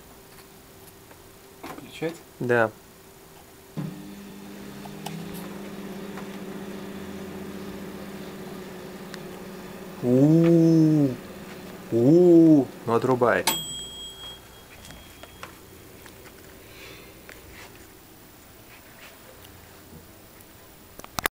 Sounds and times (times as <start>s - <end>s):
Speech: 1.7s - 2.8s, 10.0s - 11.2s, 11.9s - 13.5s.